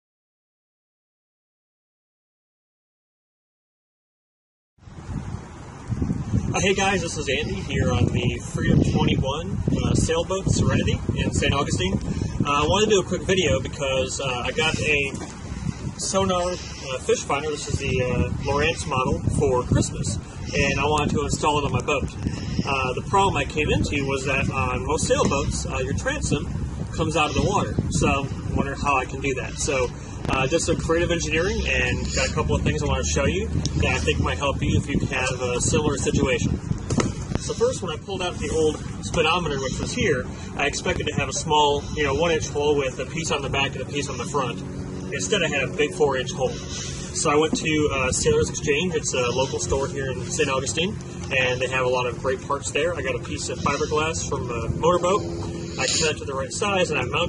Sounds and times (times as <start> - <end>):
Speech: 6.5 - 15.2, 16.0 - 36.6, 37.4 - 57.2.